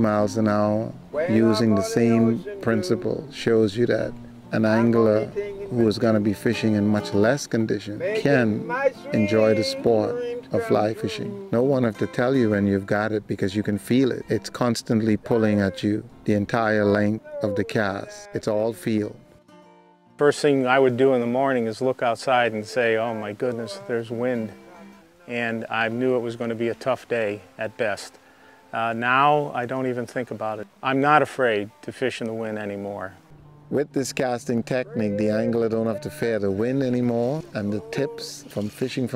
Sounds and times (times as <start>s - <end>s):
Speech: 0.0s - 19.2s, 20.2s - 24.6s, 25.3s - 28.1s, 28.8s - 39.1s
Music: 0.0s - 39.1s.